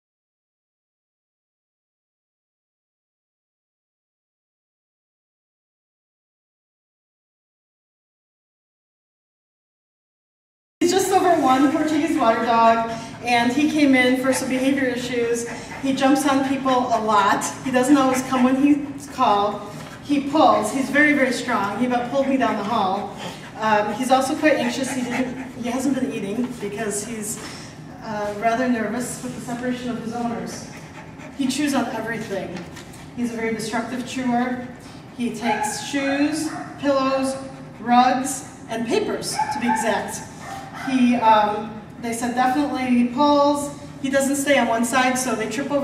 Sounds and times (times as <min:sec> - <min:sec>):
Speech: 0:10.8 - 0:30.8, 0:31.4 - 0:45.8
Dog: 0:13.4 - 0:19.6, 0:21.6 - 0:26.0, 0:30.4 - 0:31.9, 0:34.6 - 0:38.6, 0:39.3 - 0:41.2.